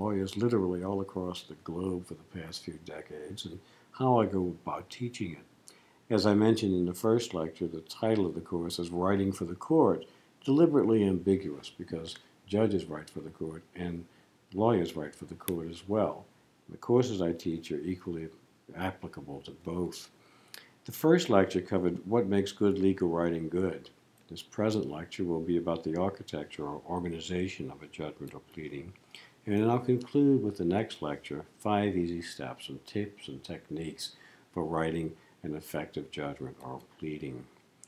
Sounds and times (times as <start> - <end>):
Speech: 0.0 - 5.5, 6.1 - 20.2, 20.8 - 37.8.